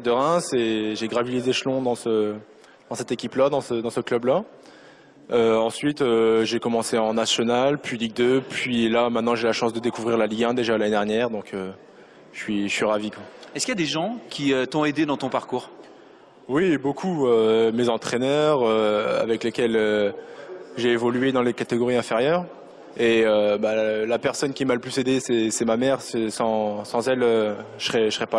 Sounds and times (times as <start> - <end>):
Speech: 0.0 - 4.5, 5.3 - 15.8, 16.5 - 28.3.